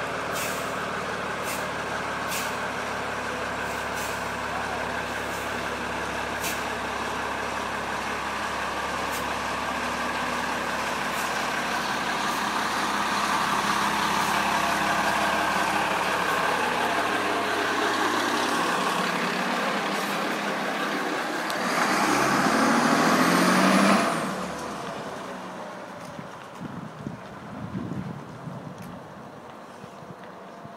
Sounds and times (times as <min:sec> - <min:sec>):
Truck: 0:00.0 - 0:30.7.